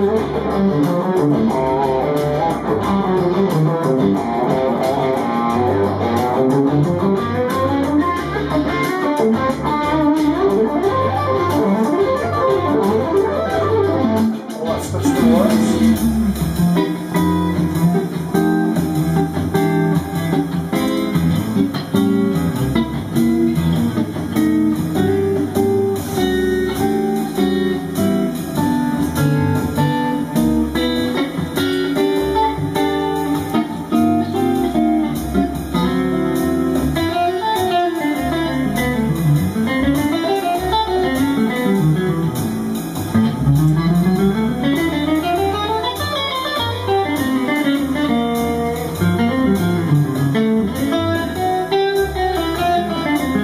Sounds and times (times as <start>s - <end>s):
Electric guitar: 0.0s - 53.4s
Speech: 14.6s - 16.4s.